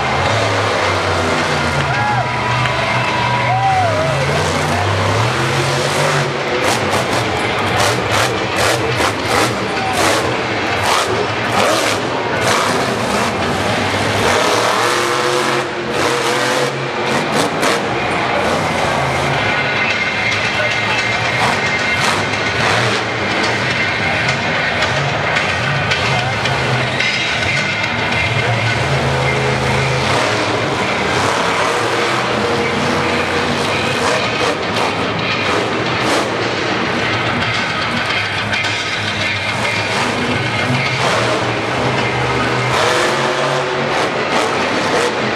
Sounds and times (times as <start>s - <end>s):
Truck: 0.0s - 45.3s.